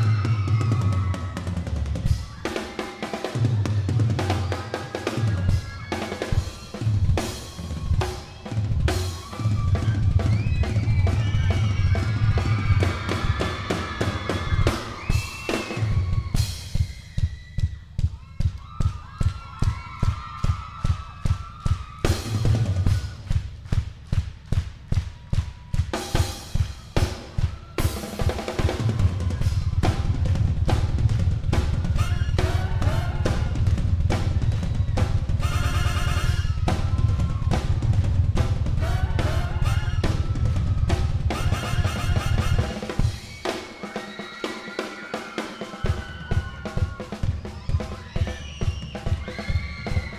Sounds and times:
Drum kit: 0.0 - 50.1
Bass drum: 6.5 - 43.3.

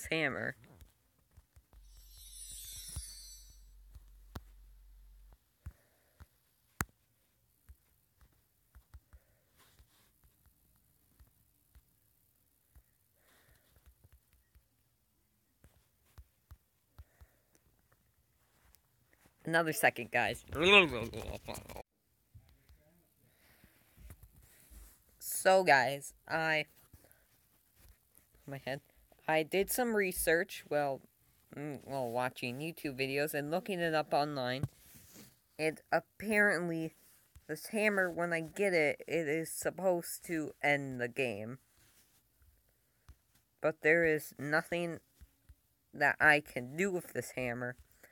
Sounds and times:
Speech: 0.0 - 0.6, 19.5 - 21.8, 25.2 - 26.7, 28.5 - 34.7, 35.6 - 41.6, 43.6 - 45.0, 46.0 - 47.8
Inside, small room: 0.0 - 48.1.

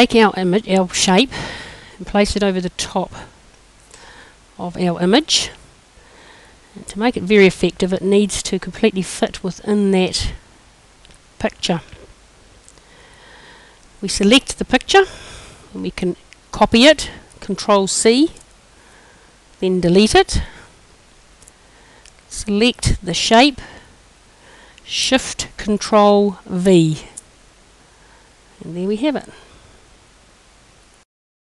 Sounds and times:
Speech: 0.0 - 1.3, 2.0 - 3.3, 4.6 - 5.6, 6.8 - 10.4, 11.4 - 12.0, 14.0 - 15.1, 15.7 - 18.4, 19.6 - 20.5, 22.3 - 23.7, 24.9 - 27.2, 28.6 - 29.4.

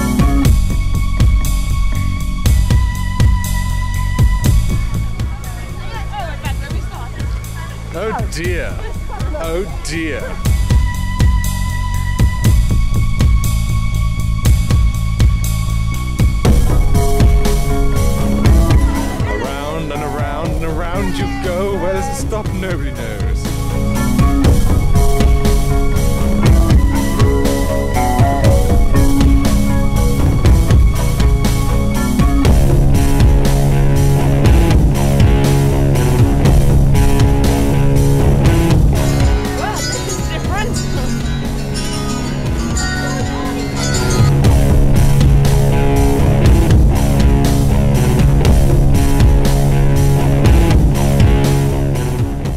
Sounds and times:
Rock music: 0.0 - 52.5.

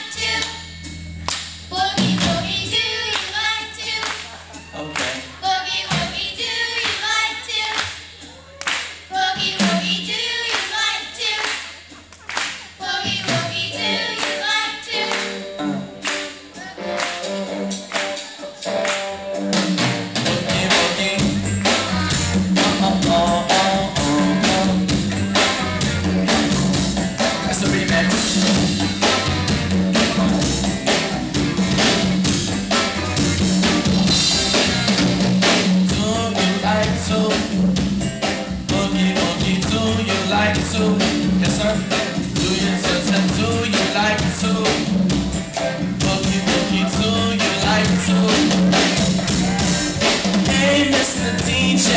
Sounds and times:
Rhythm and blues: 0.0 - 51.9.

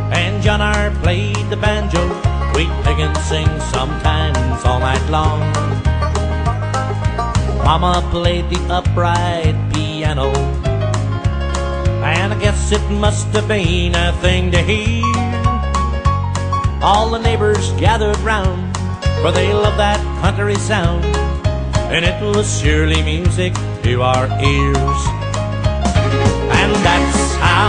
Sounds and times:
Music: 0.0 - 27.6.

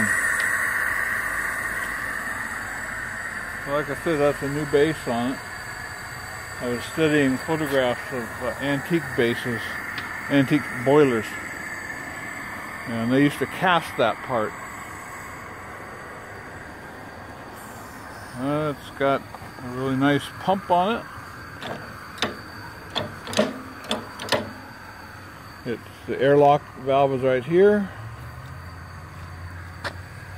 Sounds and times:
Speech: 3.7 - 5.4, 6.6 - 11.4, 12.9 - 14.5, 18.4 - 21.1, 25.6 - 27.9.

